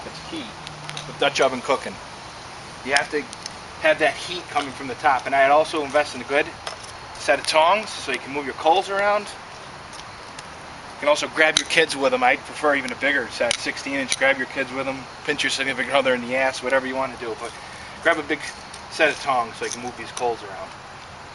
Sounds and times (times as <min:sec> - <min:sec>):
Speech: 0:00.0 - 0:02.0, 0:02.8 - 0:06.6, 0:07.2 - 0:09.4, 0:11.0 - 0:20.7.